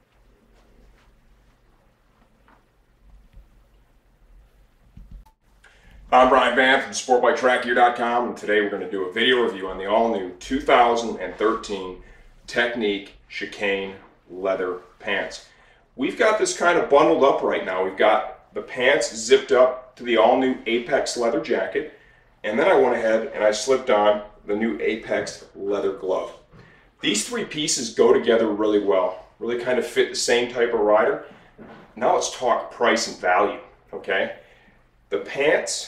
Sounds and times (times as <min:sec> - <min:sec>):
Speech: 0:06.1 - 0:34.4, 0:35.1 - 0:35.8.